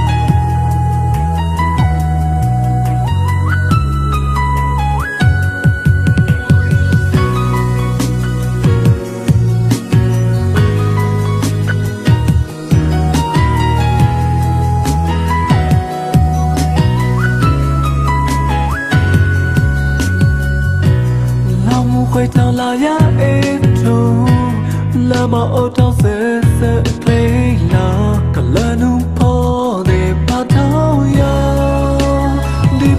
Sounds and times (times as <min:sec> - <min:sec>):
Music: 0:00.0 - 0:32.9.